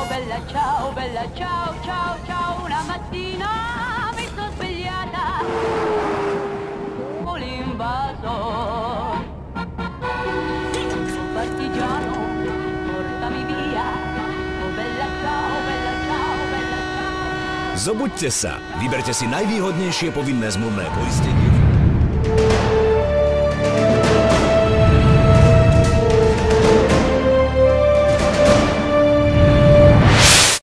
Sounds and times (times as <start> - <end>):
Music: 0.0 - 5.4, 7.2 - 30.4.